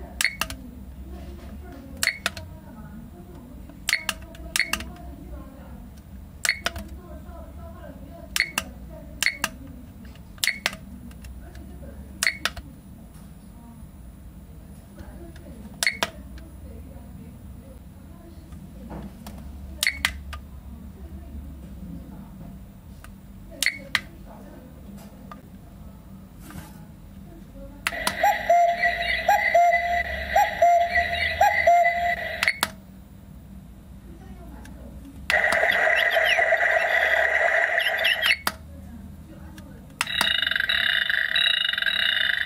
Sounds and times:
Speech: 0:00.0 - 0:06.0, 0:06.6 - 0:14.0, 0:14.6 - 0:22.7, 0:23.4 - 0:32.3, 0:34.0 - 0:37.3, 0:38.6 - 0:40.1
Alarm clock: 0:27.9 - 0:32.6, 0:35.3 - 0:38.4, 0:40.0 - 0:42.4.

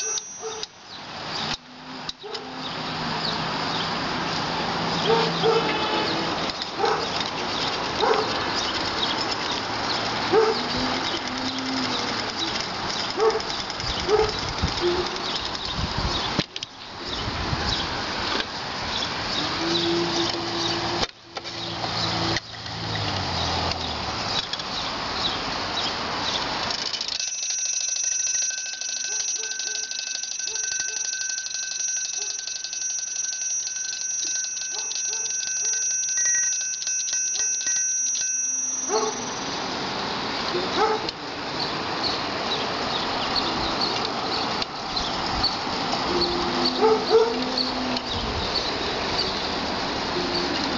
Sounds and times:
Gears: 0:00.0 - 0:00.8, 0:06.4 - 0:16.7, 0:26.6 - 0:39.6
Ratchet, pawl: 0:00.0 - 0:00.8, 0:06.4 - 0:16.4, 0:26.6 - 0:39.7.

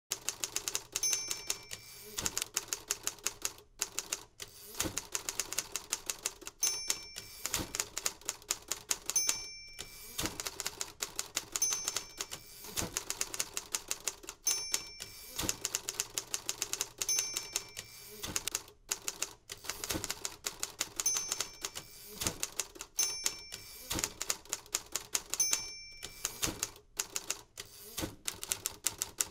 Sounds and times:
Typewriter: 0:00.1 - 0:29.3.

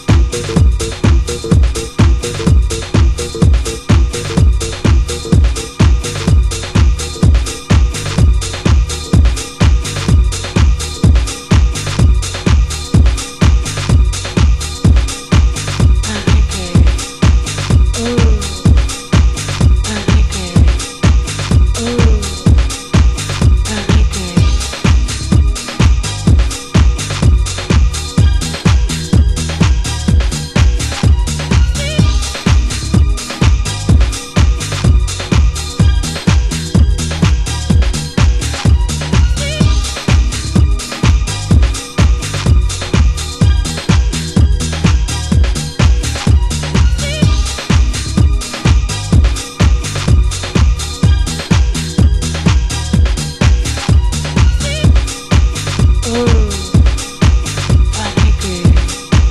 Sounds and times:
Music: 0:00.0 - 0:59.3
Speech: 0:16.1 - 0:17.0, 0:18.0 - 0:18.6, 0:19.9 - 0:20.8, 0:21.8 - 0:22.4, 0:23.7 - 0:24.5, 0:56.0 - 0:56.8, 0:58.0 - 0:58.9.

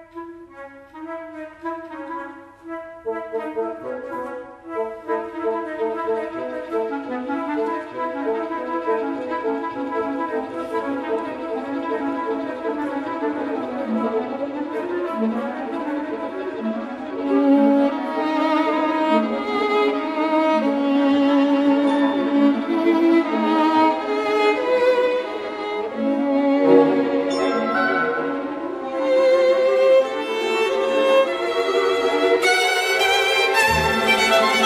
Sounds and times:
String section: 0:00.0 - 0:34.6.

